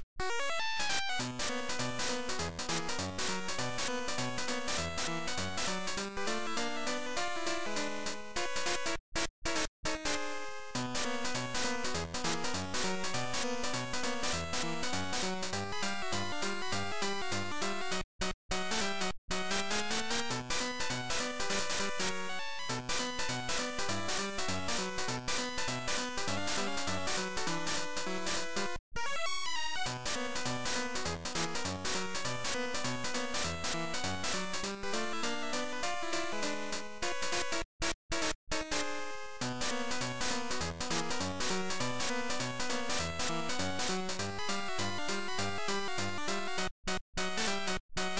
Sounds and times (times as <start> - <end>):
Video game music: 0.0 - 48.2.